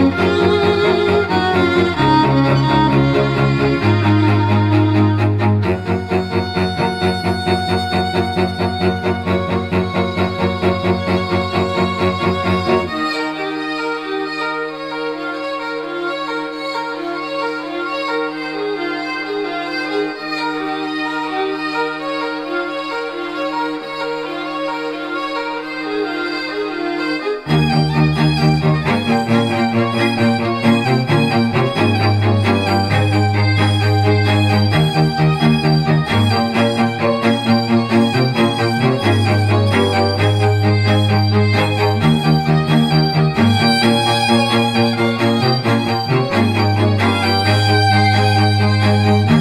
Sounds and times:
Music: 0.0s - 49.4s.

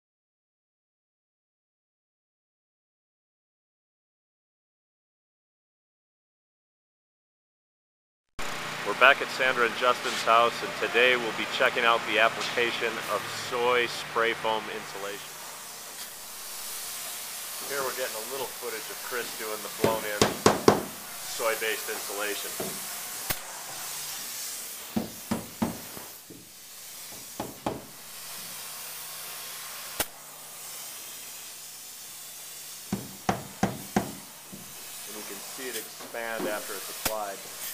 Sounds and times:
Speech: 8.8s - 15.3s, 17.6s - 20.4s, 21.3s - 22.7s, 35.1s - 37.5s
Spray: 8.9s - 37.7s.

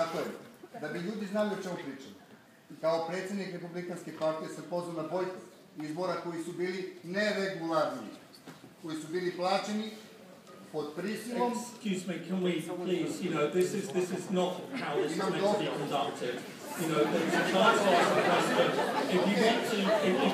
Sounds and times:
Male speech, man speaking: 0.0s - 8.2s, 8.8s - 20.3s
Narration, monologue: 0.0s - 20.3s.

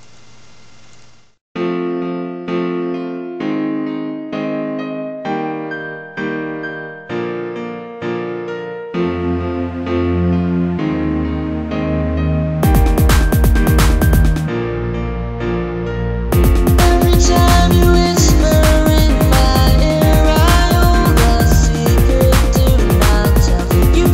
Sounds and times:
Music: 1.6s - 24.1s
Female singing: 16.8s - 24.1s.

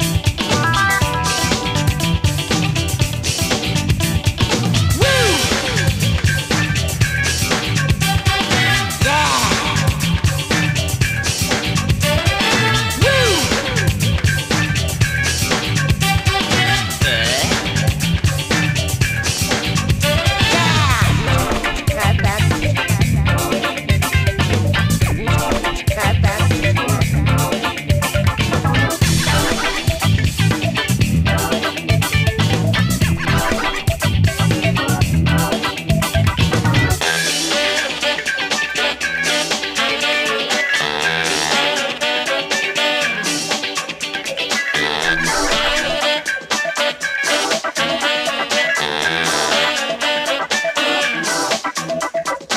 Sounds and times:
Music: 0.0s - 52.5s.

